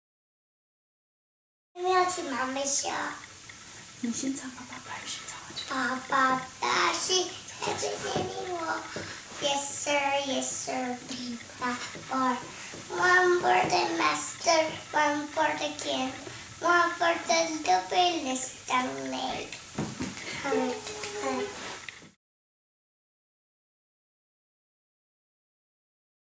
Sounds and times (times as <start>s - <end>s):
Child singing: 1.8s - 3.3s, 5.4s - 19.6s, 20.3s - 21.7s.